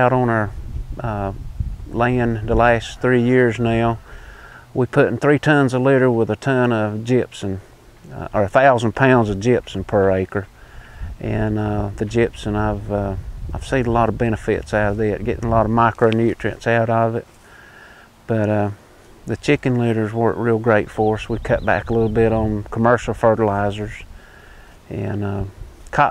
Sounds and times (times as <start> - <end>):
Speech: 0.0 - 4.0, 4.8 - 10.5, 11.2 - 17.3, 18.3 - 24.1, 24.9 - 26.1.